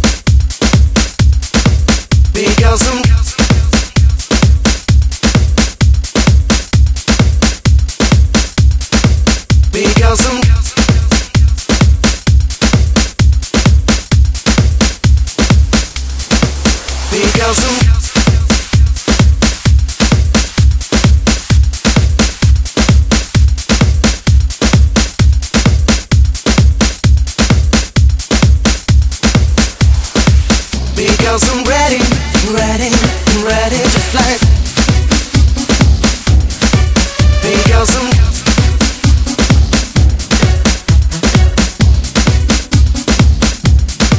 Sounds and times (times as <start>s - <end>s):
Music: 0.0s - 44.1s.